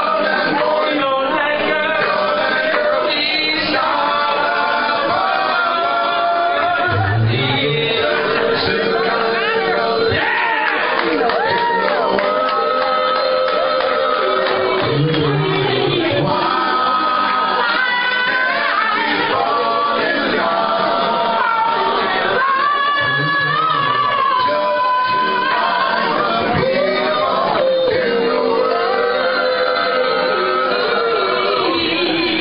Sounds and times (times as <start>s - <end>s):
Male singing: 0.0s - 10.5s, 22.4s - 32.4s
Choir: 0.0s - 32.4s
Speech: 22.3s - 25.6s.